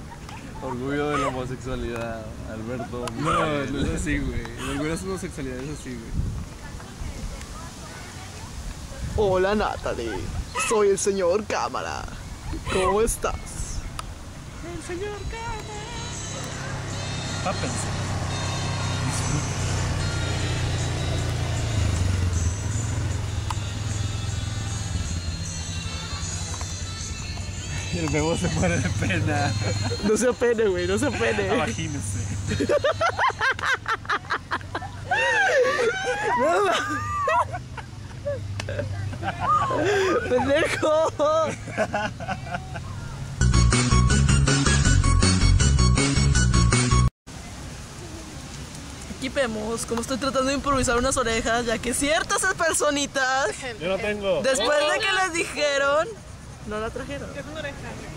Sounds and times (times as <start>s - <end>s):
Music: 14.9s - 32.9s, 43.4s - 47.1s.